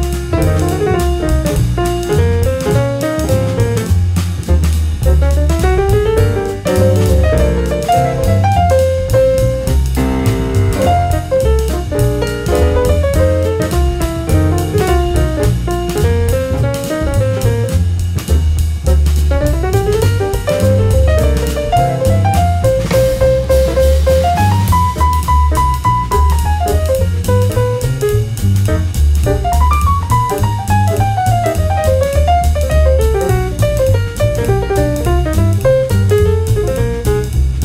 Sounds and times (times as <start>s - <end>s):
Music: 0.0s - 37.6s.